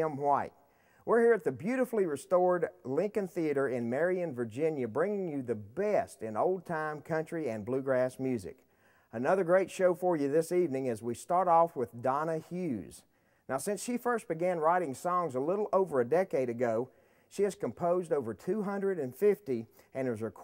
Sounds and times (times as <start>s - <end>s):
Speech: 0.0s - 20.4s.